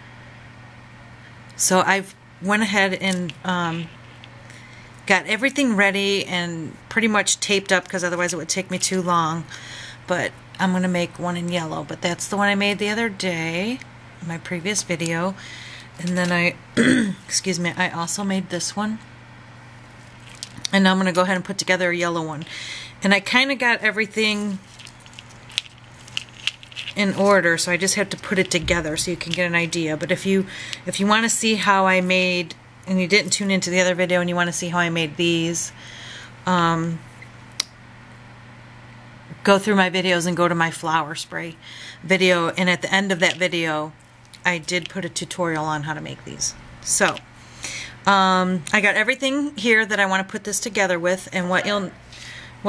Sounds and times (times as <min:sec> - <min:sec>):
Speech: 0:01.6 - 0:03.9, 0:05.1 - 0:09.5, 0:10.1 - 0:15.4, 0:16.0 - 0:16.6, 0:17.3 - 0:19.0, 0:20.7 - 0:24.6, 0:27.0 - 0:35.8, 0:36.5 - 0:37.0, 0:39.3 - 0:47.2, 0:48.1 - 0:52.0.